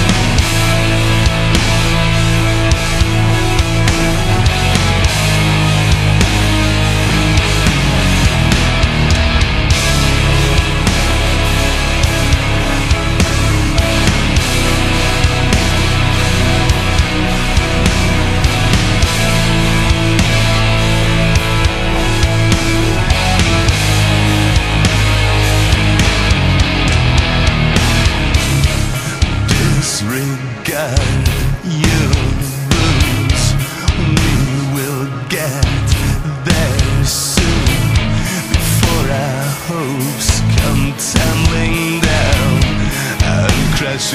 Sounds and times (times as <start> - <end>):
Music: 0.0 - 44.1.